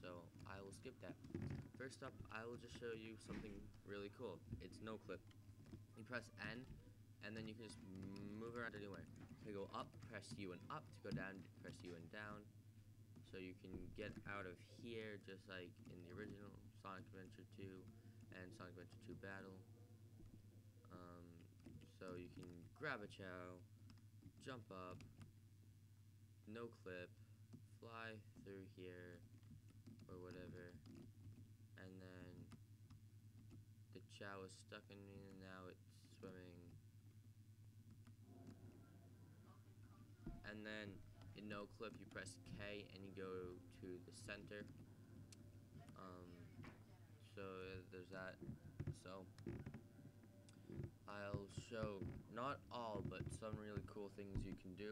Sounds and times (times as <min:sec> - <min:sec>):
Speech: 0:00.0 - 0:05.2, 0:06.0 - 0:12.5, 0:13.2 - 0:19.7, 0:20.9 - 0:23.6, 0:24.4 - 0:25.0, 0:26.5 - 0:27.2, 0:27.8 - 0:29.2, 0:30.1 - 0:30.8, 0:31.8 - 0:32.5, 0:34.0 - 0:36.8, 0:40.3 - 0:44.7, 0:45.8 - 0:49.4, 0:51.1 - 0:54.9.